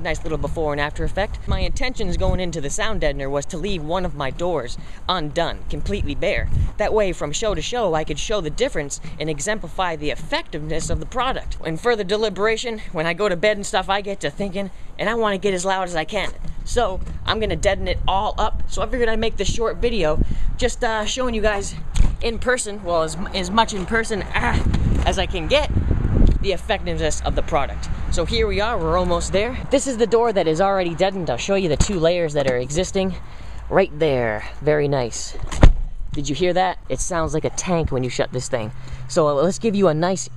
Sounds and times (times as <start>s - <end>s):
Speech: 0.0s - 25.7s, 26.4s - 35.4s, 36.1s - 40.3s.